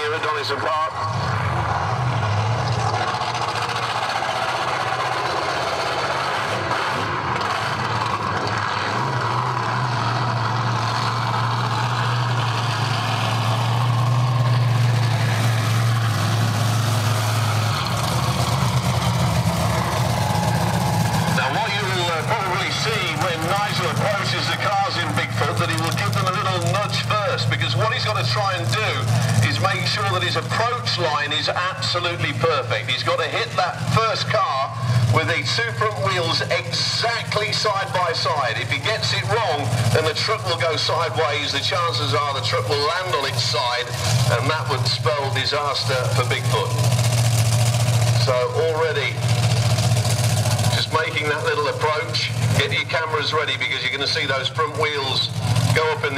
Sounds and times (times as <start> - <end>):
Truck: 0.0 - 56.1.